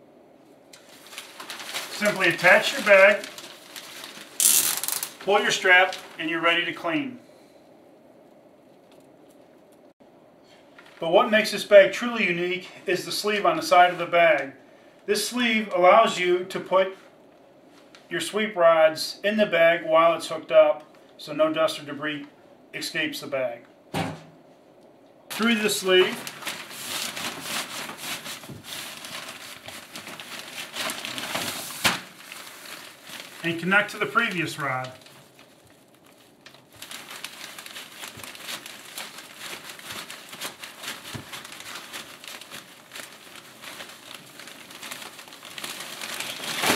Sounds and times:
Speech: 0:01.9 - 0:03.3, 0:05.2 - 0:07.2, 0:11.0 - 0:17.1, 0:18.1 - 0:23.7, 0:25.3 - 0:26.3, 0:33.4 - 0:35.0.

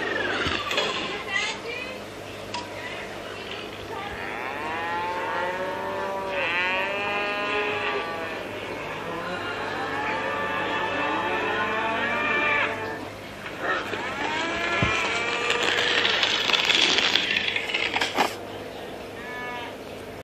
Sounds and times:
Moo: 0:04.1 - 0:16.4, 0:19.2 - 0:19.8.

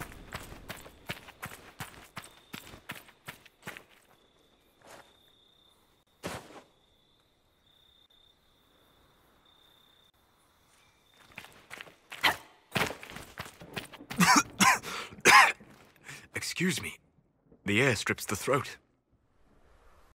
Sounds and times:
Cough: 0:14.2 - 0:15.6
Speech: 0:16.3 - 0:17.0, 0:17.6 - 0:18.8.

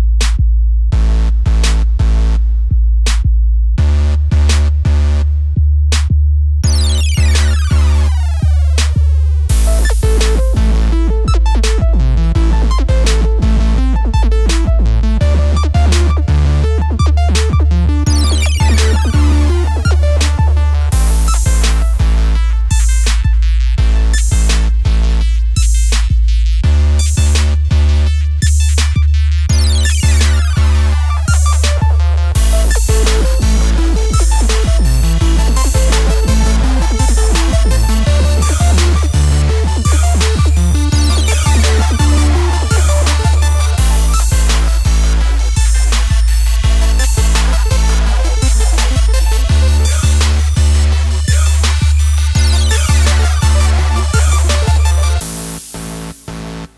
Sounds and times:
Music: 0:00.0 - 0:00.4, 0:01.0 - 0:56.7.

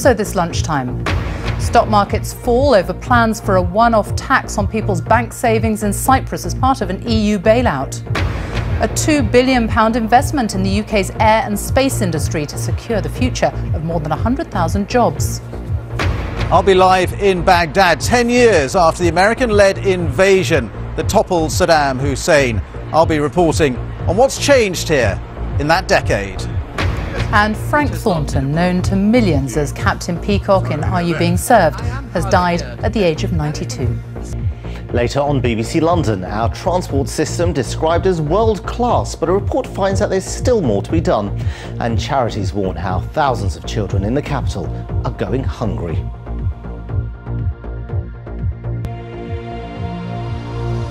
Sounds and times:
Speech: 0:00.0 - 0:00.9, 0:01.6 - 0:08.0, 0:08.8 - 0:15.4, 0:16.6 - 0:26.5, 0:27.2 - 0:34.0, 0:34.9 - 0:46.0
Music: 0:00.0 - 0:50.9.

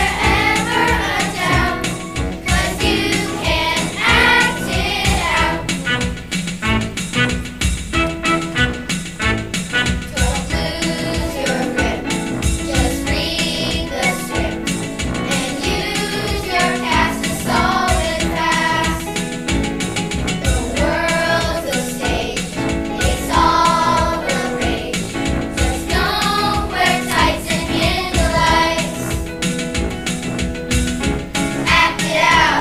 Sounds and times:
Choir: 0:00.0 - 0:05.8, 0:10.1 - 0:12.1, 0:12.7 - 0:19.3, 0:20.5 - 0:29.3, 0:31.6 - 0:32.6.

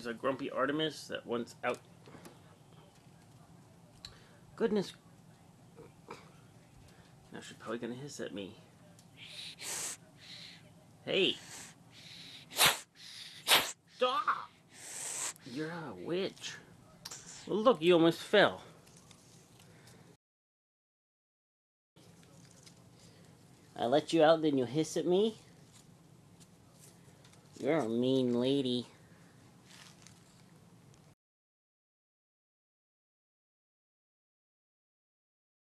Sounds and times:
Speech: 0:00.0 - 0:01.8, 0:23.8 - 0:25.5, 0:27.6 - 0:29.0.

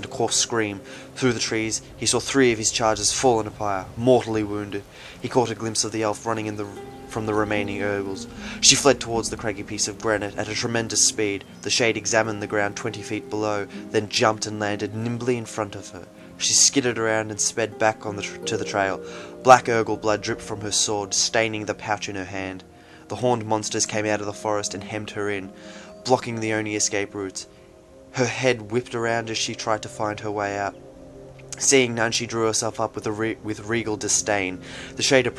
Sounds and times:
Music: 0:00.0 - 0:35.3
Narration, monologue: 0:00.0 - 0:35.3.

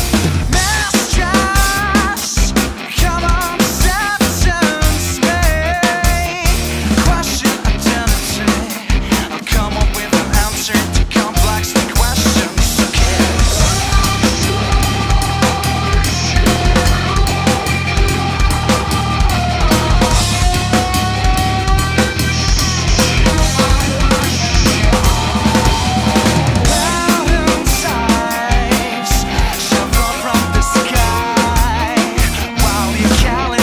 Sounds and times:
Drum: 0:00.0 - 0:33.6
Drum kit: 0:00.0 - 0:33.6.

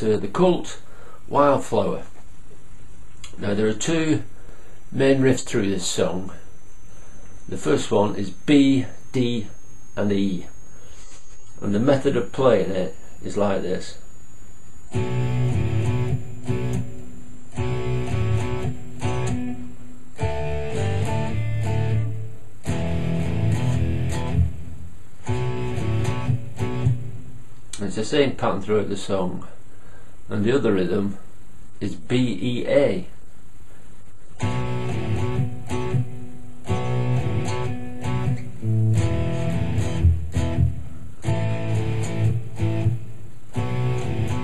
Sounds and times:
Speech: 0:00.0 - 0:02.2, 0:03.3 - 0:04.3, 0:05.0 - 0:06.4, 0:07.5 - 0:10.5, 0:11.6 - 0:14.0, 0:27.8 - 0:29.6, 0:30.3 - 0:33.2
Strum: 0:03.3 - 0:27.8, 0:34.3 - 0:44.4
Electric guitar: 0:14.9 - 0:27.8, 0:34.4 - 0:44.4.

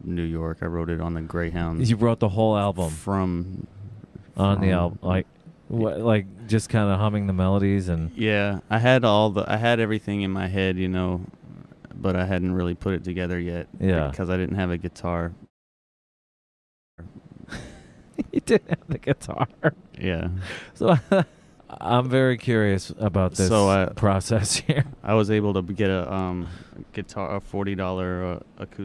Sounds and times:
Speech: 0:00.0 - 0:11.3, 0:12.0 - 0:15.4, 0:18.2 - 0:21.0, 0:21.7 - 0:28.8.

